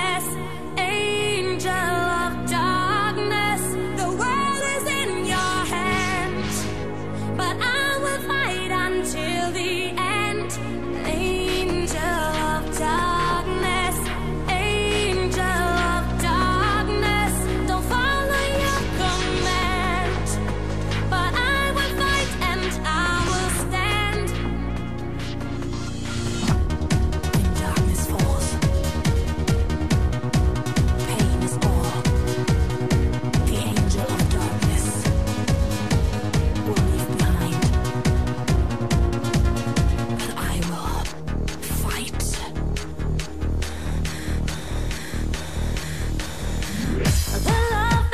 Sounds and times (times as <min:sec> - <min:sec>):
Music: 0:00.0 - 0:48.1.